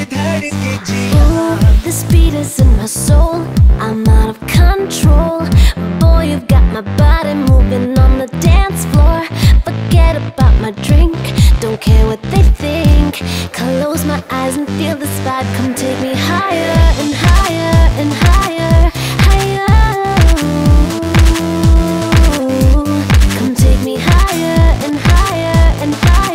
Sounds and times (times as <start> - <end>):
Dance music: 0.0 - 26.3
Pop music: 0.0 - 26.3.